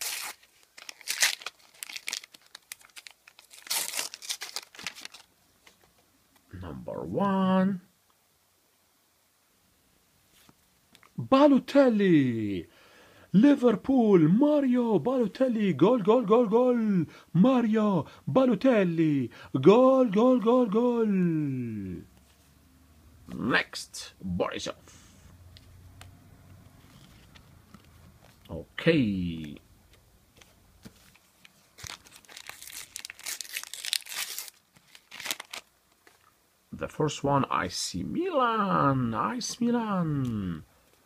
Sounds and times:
Inside, small room: 0.0s - 41.0s
Speech: 6.5s - 7.9s, 11.2s - 12.7s, 13.4s - 22.1s, 23.3s - 24.9s, 28.5s - 29.6s, 36.7s - 40.7s.

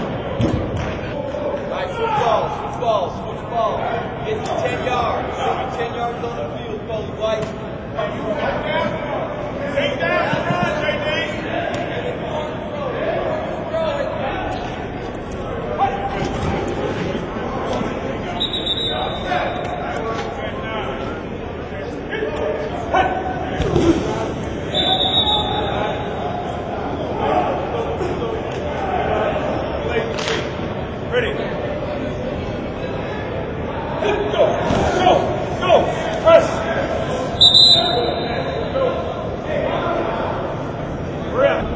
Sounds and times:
Speech: 0.0s - 41.7s.

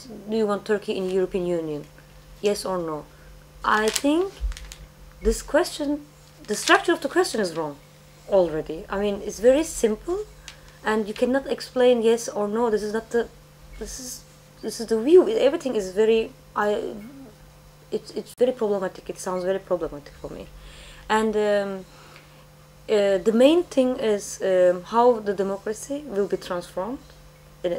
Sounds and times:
Speech: 0.0s - 4.4s, 5.2s - 17.3s, 17.9s - 20.5s, 21.1s - 21.9s, 22.9s - 27.7s.

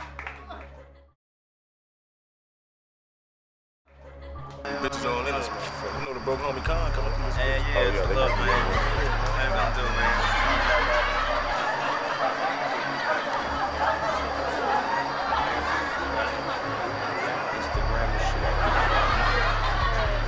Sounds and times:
Inside, large room or hall: 0.0s - 0.9s, 9.1s - 20.2s
Music: 0.0s - 1.2s, 3.8s - 20.2s
Chatter: 4.0s - 20.2s
Speech: 4.7s - 10.3s.

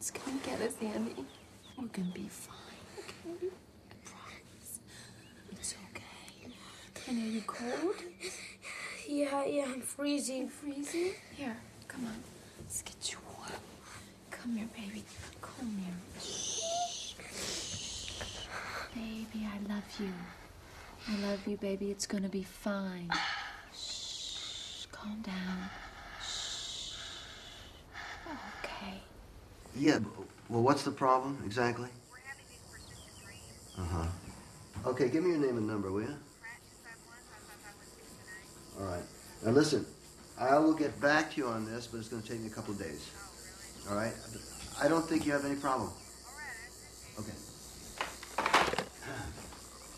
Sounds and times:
Whispering: 4.0s - 4.5s, 5.5s - 6.6s, 12.8s - 13.6s.

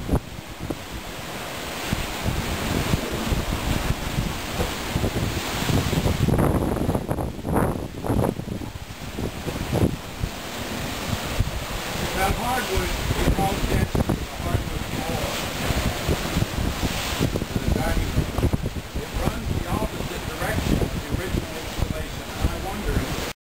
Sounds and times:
Ocean: 0.0s - 23.4s
Speech: 12.1s - 15.4s, 17.6s - 18.2s, 19.0s - 23.2s.

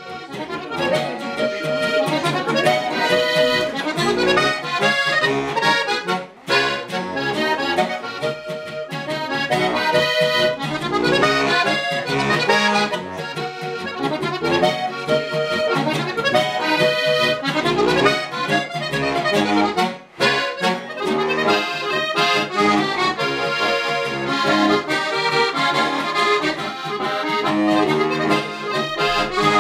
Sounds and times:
Accordion: 0.0s - 29.6s.

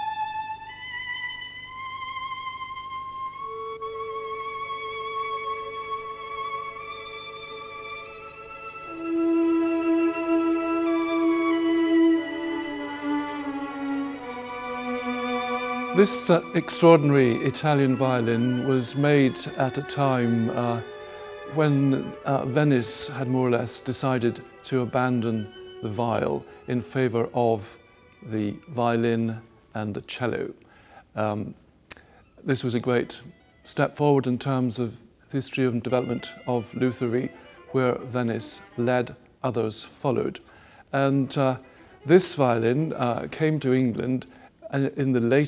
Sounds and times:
Violin, fiddle: 0.0s - 30.6s, 31.2s - 45.4s
Speech: 16.0s - 20.8s, 21.5s - 30.6s, 31.2s - 31.6s, 32.4s - 45.4s.

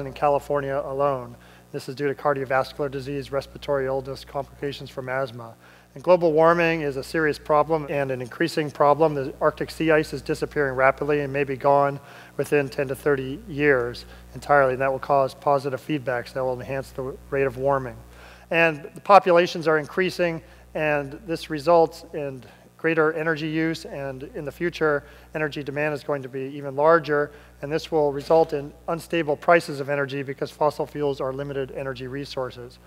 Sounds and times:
Speech: 0.0s - 32.8s.

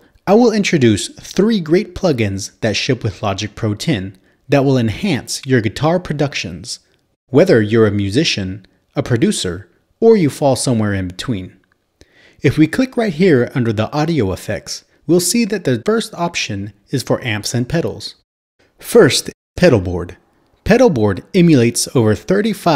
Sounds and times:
Speech: 0.2s - 11.6s, 12.4s - 18.2s, 18.8s - 22.7s.

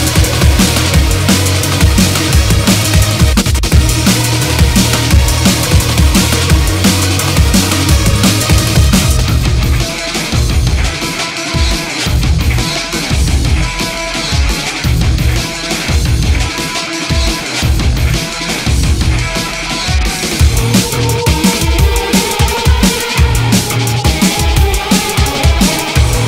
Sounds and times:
Angry music: 0.0s - 26.2s
Drum and bass: 0.0s - 26.2s.

